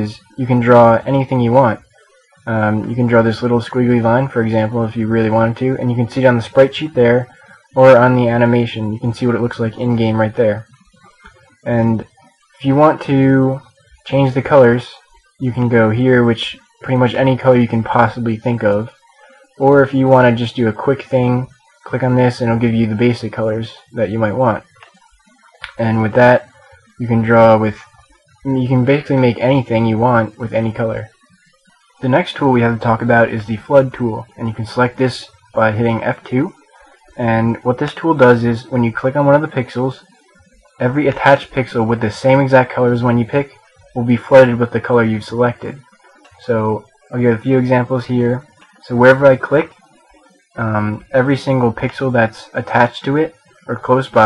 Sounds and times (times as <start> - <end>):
Speech: 0.0 - 1.8, 2.4 - 10.8, 11.6 - 19.0, 19.6 - 24.8, 25.6 - 31.1, 32.0 - 36.6, 37.2 - 40.1, 40.8 - 49.7, 50.6 - 54.2.